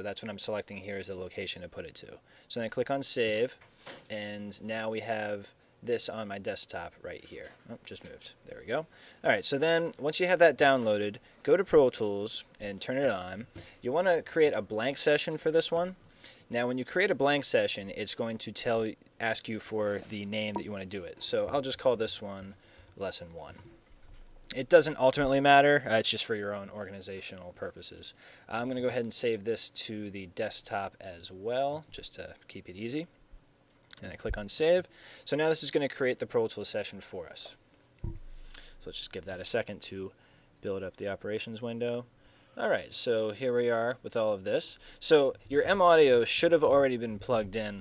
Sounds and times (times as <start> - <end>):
Speech: 0.0 - 23.6, 24.5 - 33.2, 34.0 - 37.6, 38.8 - 47.8.